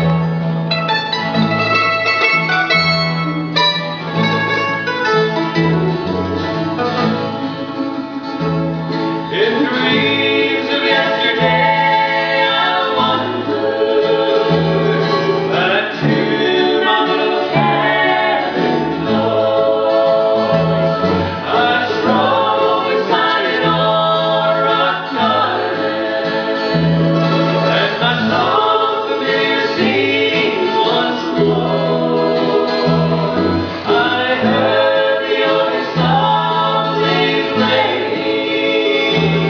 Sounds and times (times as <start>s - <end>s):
Music: 0.0s - 39.4s
Male singing: 9.3s - 20.6s, 21.4s - 25.8s, 27.7s - 33.2s, 33.8s - 39.4s.